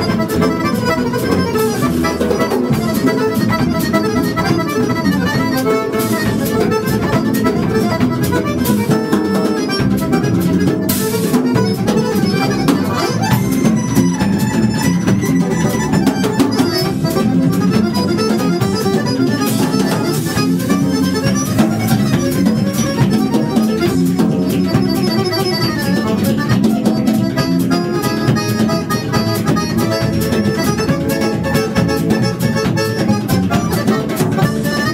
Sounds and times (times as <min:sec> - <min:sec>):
Accordion: 0:00.0 - 0:34.9.